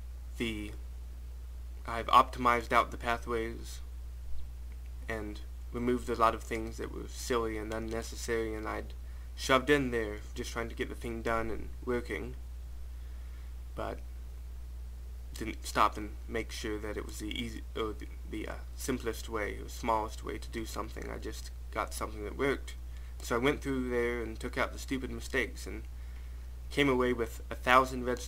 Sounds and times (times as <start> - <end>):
Speech: 0.4 - 0.8, 1.8 - 3.9, 5.1 - 12.4, 13.8 - 14.0, 15.3 - 25.9, 26.7 - 28.2.